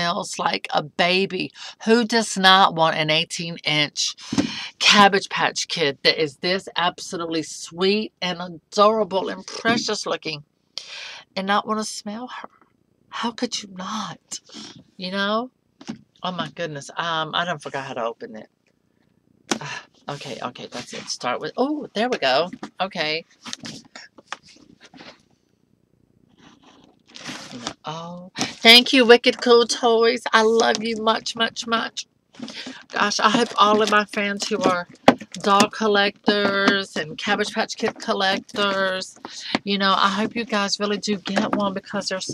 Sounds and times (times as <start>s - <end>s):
Speech: 0.0s - 12.5s, 13.1s - 15.5s, 16.2s - 18.5s, 19.5s - 24.1s, 27.2s - 42.3s
Inside, small room: 0.0s - 42.3s.